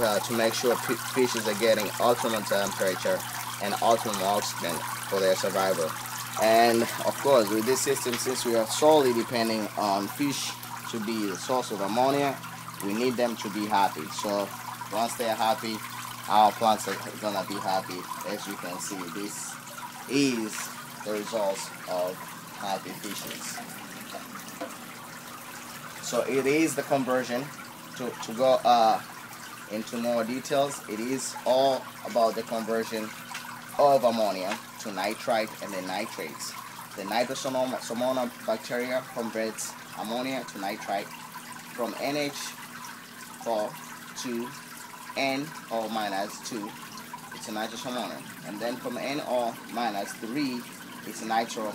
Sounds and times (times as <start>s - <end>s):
Speech: 0.0s - 23.6s, 26.0s - 29.1s, 29.7s - 33.1s, 33.8s - 41.2s, 41.8s - 42.6s, 43.4s - 44.6s, 45.2s - 46.8s, 47.4s - 51.7s.